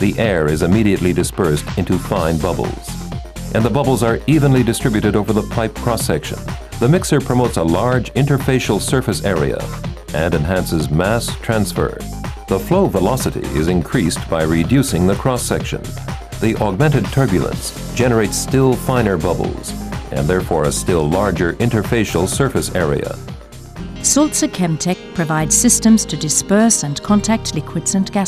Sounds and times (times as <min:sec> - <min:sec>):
Speech: 0:00.0 - 0:03.0, 0:03.6 - 0:23.2, 0:24.0 - 0:28.2
Music: 0:00.0 - 0:28.2.